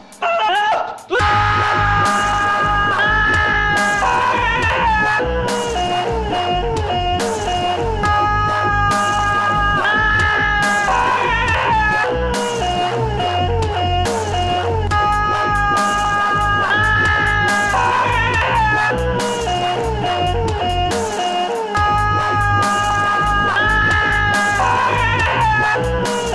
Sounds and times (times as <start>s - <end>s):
Dubstep: 0.0s - 26.3s
Screaming: 0.2s - 26.3s.